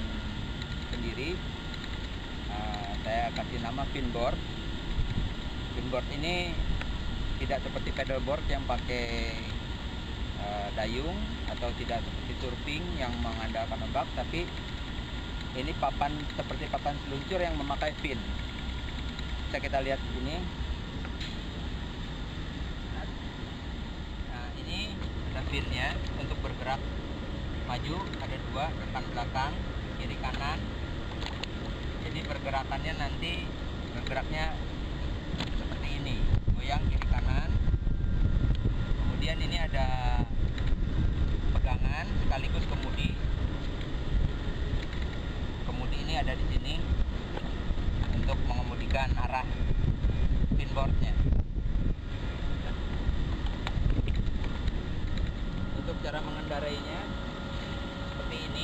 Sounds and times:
Speech: 2.5 - 4.4, 10.4 - 14.5, 15.6 - 18.3, 19.5 - 20.5, 27.7 - 30.7, 32.0 - 34.6, 35.8 - 37.6, 41.6 - 43.2, 45.7 - 46.9, 48.3 - 49.5, 50.6 - 51.2, 55.8 - 57.1.

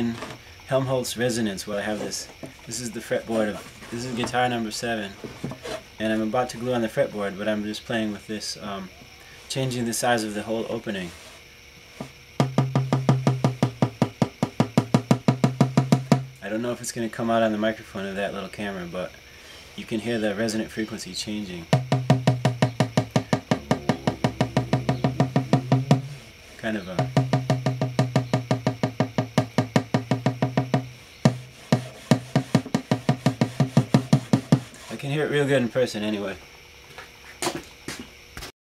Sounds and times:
Speech: 0.0 - 5.2, 6.0 - 11.2, 16.4 - 19.2, 19.8 - 21.7, 26.6 - 27.0, 34.9 - 36.4.

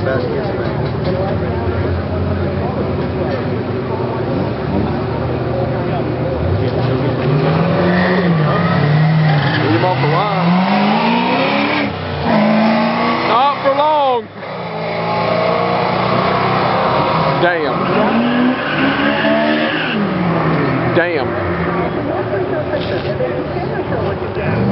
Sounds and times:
Speech: 0.0 - 7.3, 13.3 - 14.3, 20.9 - 24.7.

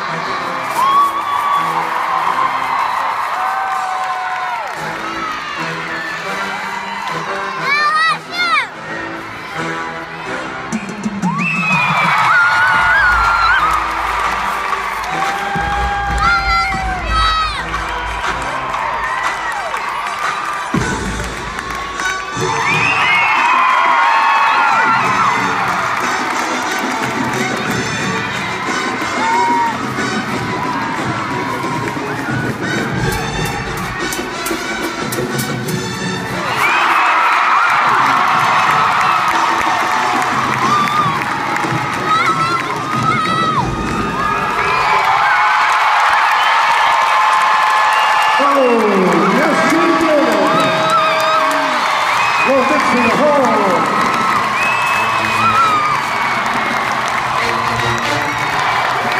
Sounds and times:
Cheering: 0.0 - 59.1
Speech: 48.4 - 50.7, 52.5 - 53.9.

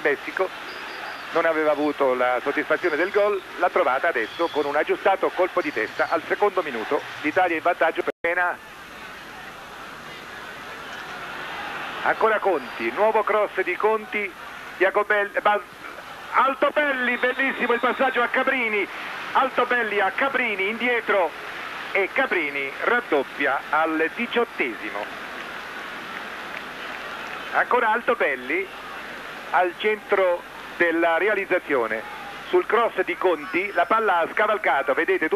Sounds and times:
Speech: 0.0 - 0.5, 1.3 - 10.9, 12.0 - 15.7, 16.3 - 21.4, 22.0 - 25.1, 27.5 - 35.3.

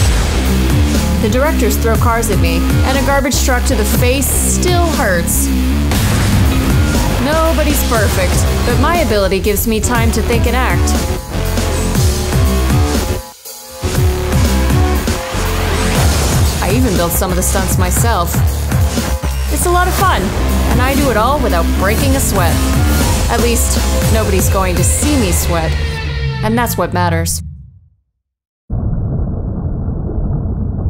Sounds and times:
Music: 0.0 - 27.5
Speech: 1.2 - 5.4, 7.2 - 11.0, 16.6 - 18.4, 19.5 - 22.6, 23.3 - 25.8, 26.4 - 27.4.

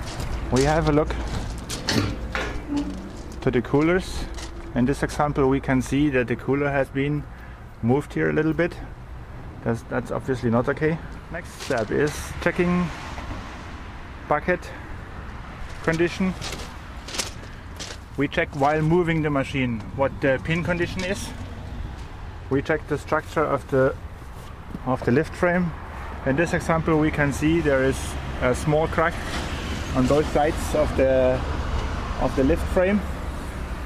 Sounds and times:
Outside, urban or manmade: 0.0 - 33.8
Vehicle: 0.0 - 33.8
Speech: 0.5 - 1.2, 2.7 - 8.9, 9.6 - 13.0, 14.3 - 14.8, 15.8 - 16.4, 18.2 - 21.4, 22.5 - 24.0, 24.8 - 29.2, 30.0 - 31.4, 32.2 - 33.1.

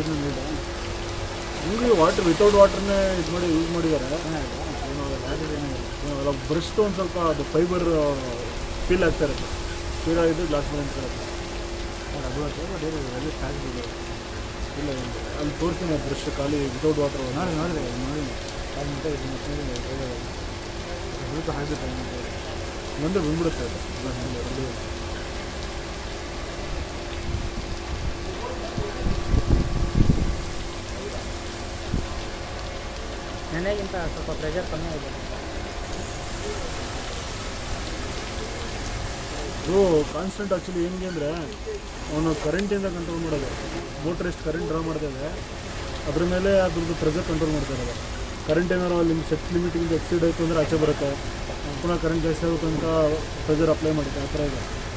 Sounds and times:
Speech: 0.0 - 0.6, 1.6 - 11.2, 12.1 - 14.0, 14.7 - 22.4, 23.0 - 24.8, 28.2 - 29.6, 33.4 - 35.6, 36.2 - 37.2, 37.8 - 45.4, 46.0 - 54.7.

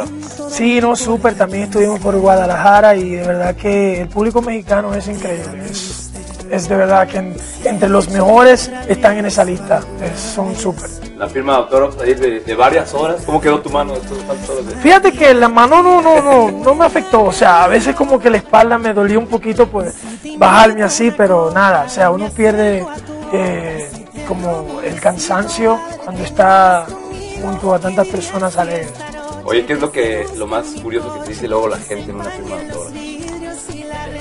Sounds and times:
Music: 0.0 - 34.2
Speech: 0.5 - 33.0.

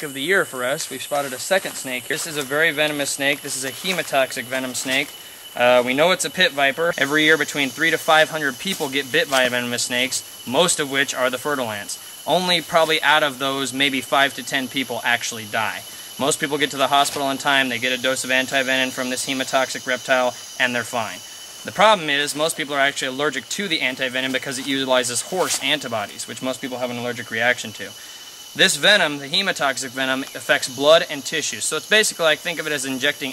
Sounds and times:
Speech: 0.0 - 28.0, 28.6 - 33.3
Outside, rural or natural: 0.0 - 33.3.

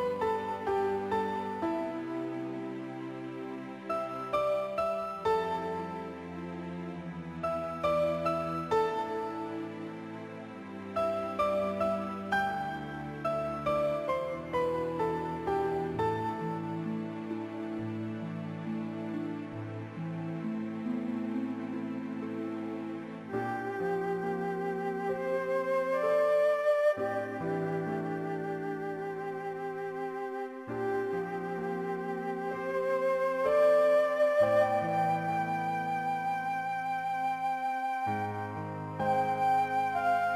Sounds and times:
Tender music: 0.0 - 40.3.

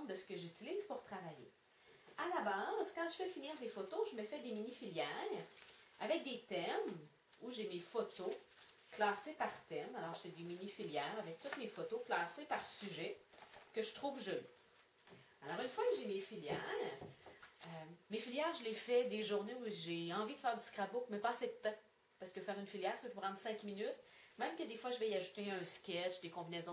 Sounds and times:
Speech: 0.0 - 1.6, 2.2 - 14.5, 15.4 - 26.7.

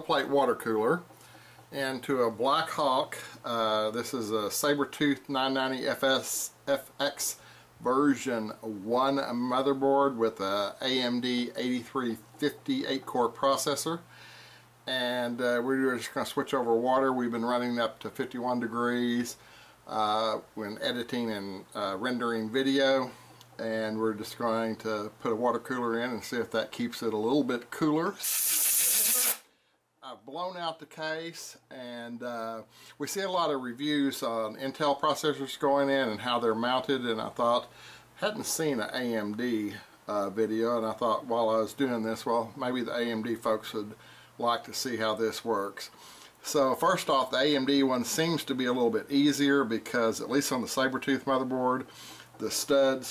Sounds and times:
Speech: 0.0 - 1.1, 1.7 - 14.1, 14.9 - 28.2, 30.0 - 53.1.

